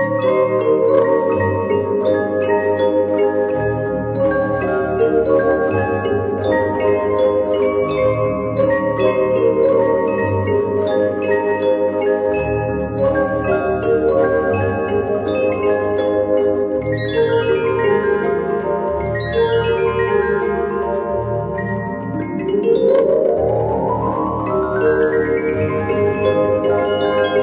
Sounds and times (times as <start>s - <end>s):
Glockenspiel: 0.0s - 27.4s
Marimba, xylophone: 0.0s - 27.4s.